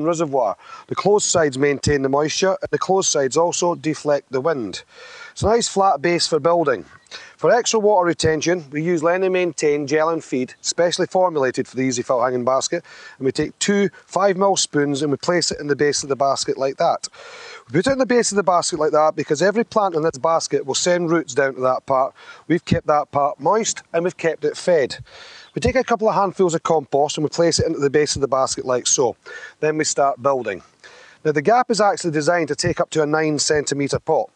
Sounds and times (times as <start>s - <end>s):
Speech: 0.0s - 34.3s.